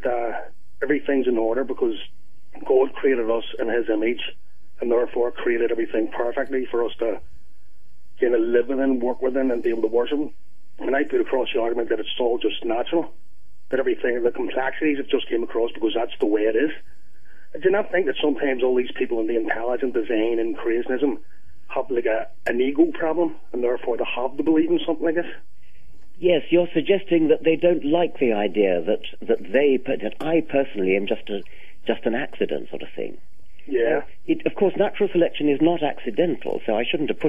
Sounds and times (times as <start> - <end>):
Radio: 0.0 - 7.2, 8.2 - 13.1, 13.7 - 25.4, 26.2 - 37.2
Speech: 0.0 - 7.2, 8.2 - 13.1, 13.7 - 16.8, 17.5 - 25.4, 26.2 - 37.2.